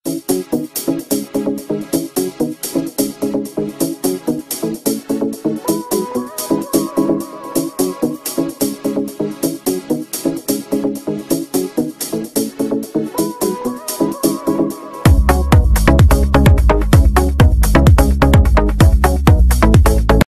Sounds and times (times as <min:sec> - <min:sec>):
Music: 0:00.0 - 0:20.2.